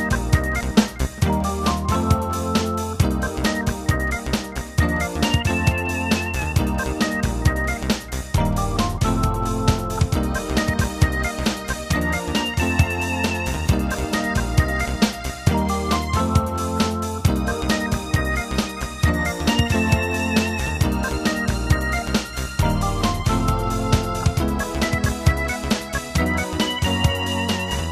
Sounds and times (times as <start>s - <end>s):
Soundtrack music: 0.0s - 27.9s.